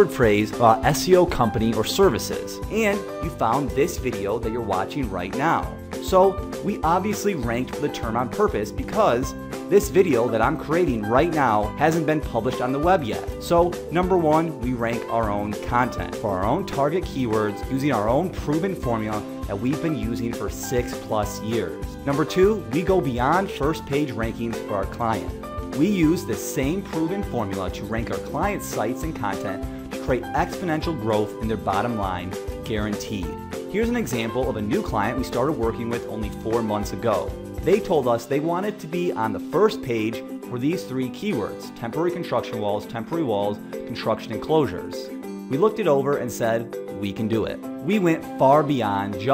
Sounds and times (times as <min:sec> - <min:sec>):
Music: 0:00.0 - 0:49.3
Speech: 0:00.0 - 0:49.3.